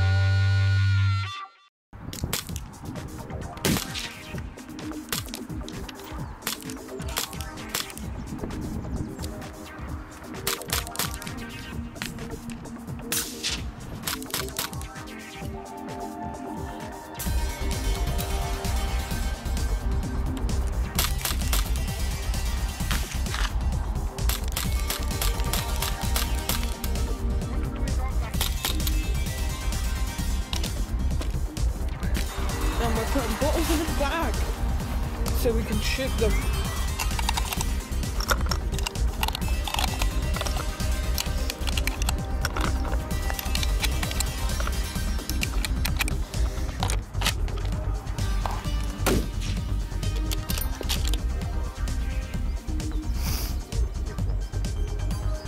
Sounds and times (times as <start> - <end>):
Music: 0.0 - 55.4
Speech: 32.8 - 34.4, 35.3 - 36.4.